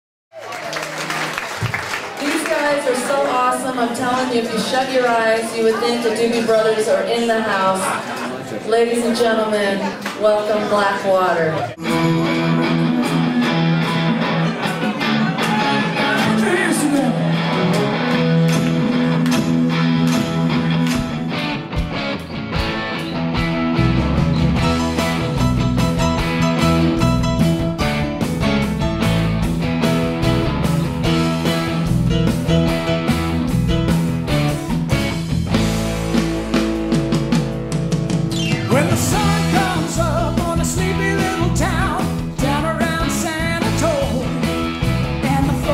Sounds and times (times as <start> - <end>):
Music: 11.8 - 45.7.